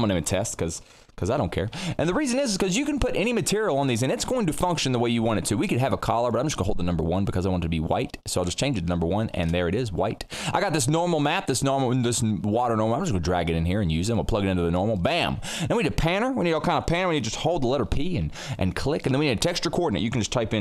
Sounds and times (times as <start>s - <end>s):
Speech: 0.0s - 20.6s.